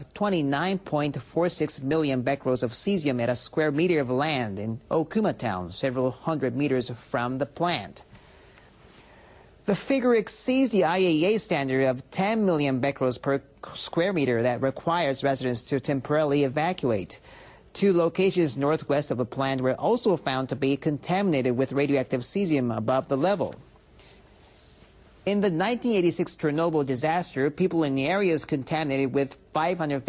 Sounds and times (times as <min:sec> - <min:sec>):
Speech: 0:00.0 - 0:08.1, 0:09.7 - 0:17.2, 0:17.8 - 0:23.6, 0:25.3 - 0:30.0.